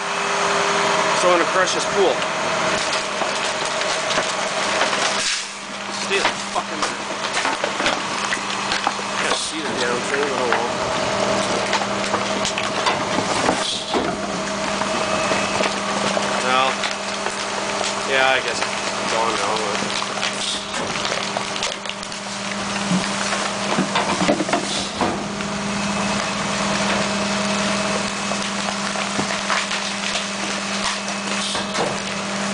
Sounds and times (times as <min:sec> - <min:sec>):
Crushing: 0:02.7 - 0:32.5.